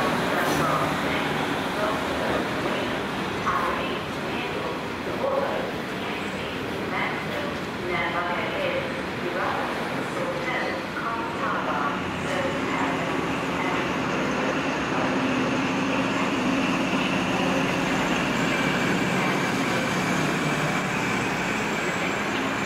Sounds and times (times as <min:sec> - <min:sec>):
Railroad car, train wagon: 0:00.0 - 0:22.6
Subway, metro, underground: 0:00.0 - 0:22.6
Train: 0:00.0 - 0:22.6.